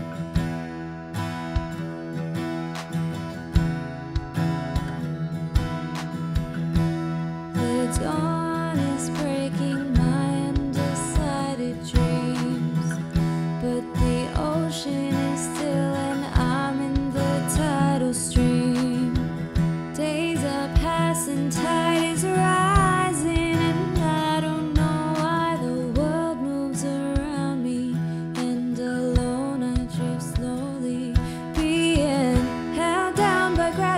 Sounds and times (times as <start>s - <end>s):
Soul music: 0.0s - 33.9s.